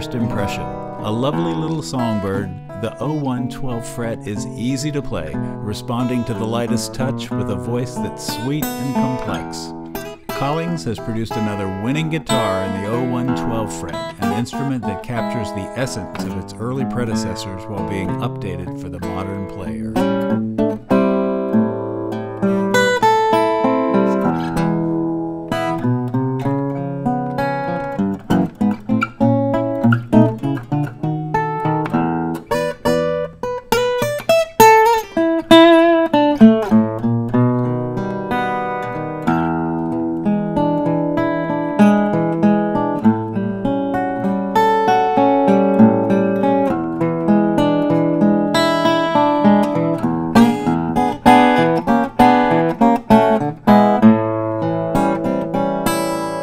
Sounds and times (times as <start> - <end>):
Speech: 0.0 - 9.7, 10.3 - 20.1
Acoustic guitar: 0.0 - 56.4
Strum: 0.0 - 56.4.